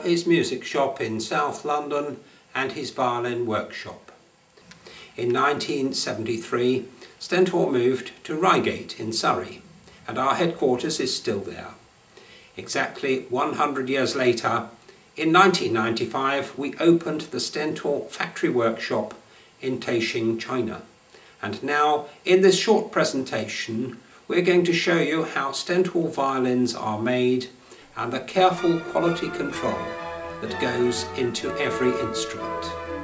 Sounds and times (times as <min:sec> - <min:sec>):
Speech: 0:00.0 - 0:04.2, 0:05.2 - 0:11.8, 0:12.6 - 0:32.8.